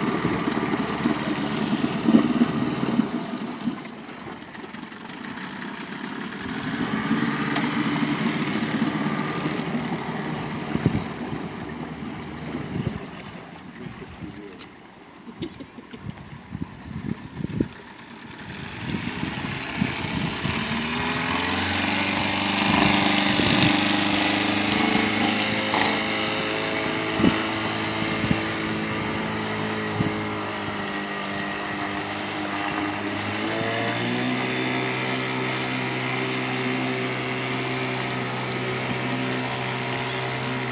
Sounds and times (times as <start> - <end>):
Motorboat, speedboat: 0.0 - 40.7
Wind noise (microphone): 10.7 - 11.5, 12.6 - 13.2, 16.0 - 17.8, 18.5 - 21.1, 22.1 - 25.6, 26.8 - 30.8.